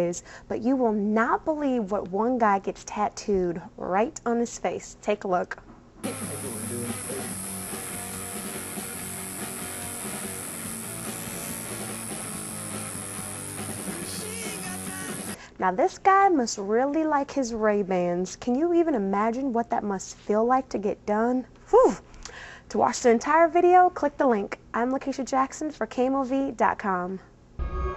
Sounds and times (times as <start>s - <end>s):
Speech: 6.2s - 7.4s, 15.6s - 22.0s, 22.7s - 27.3s.